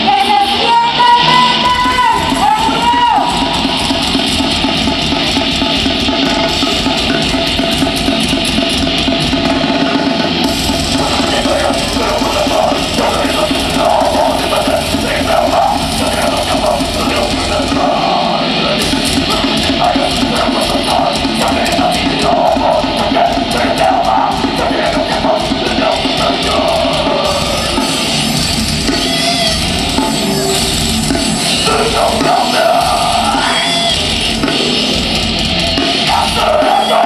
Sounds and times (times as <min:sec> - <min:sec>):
Music: 0:00.0 - 0:37.0.